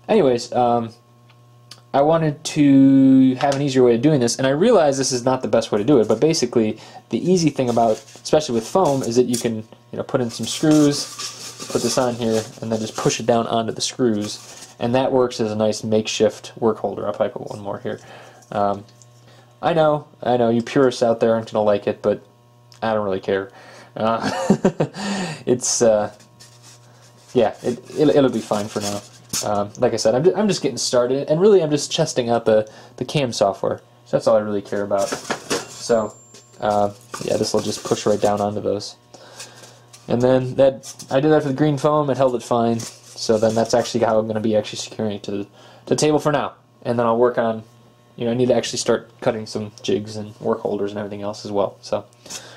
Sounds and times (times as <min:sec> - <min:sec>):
Speech: 0:00.0 - 0:01.0, 0:01.8 - 0:11.1, 0:11.7 - 0:18.9, 0:19.6 - 0:24.3, 0:25.4 - 0:26.2, 0:27.3 - 0:35.2, 0:35.8 - 0:39.0, 0:40.1 - 0:52.1
Inside, small room: 0:00.0 - 0:52.5.